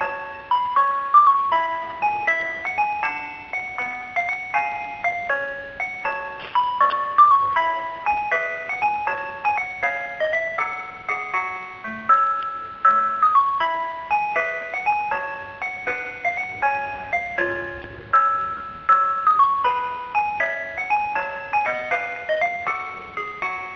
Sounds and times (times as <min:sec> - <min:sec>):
Music: 0:00.0 - 0:23.7.